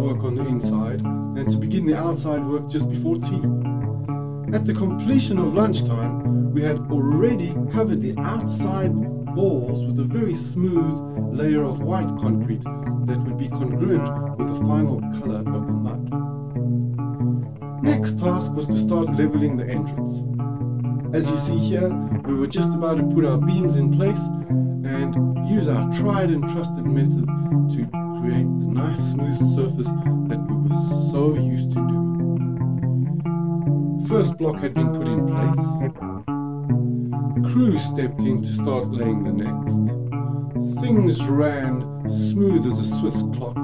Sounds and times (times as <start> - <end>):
Distortion: 0.0 - 43.6.